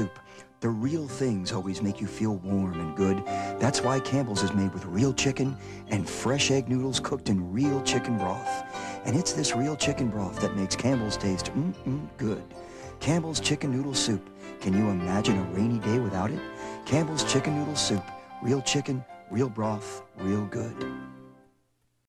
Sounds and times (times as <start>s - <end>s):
Speech: 0.0s - 20.9s
Music: 0.0s - 21.7s.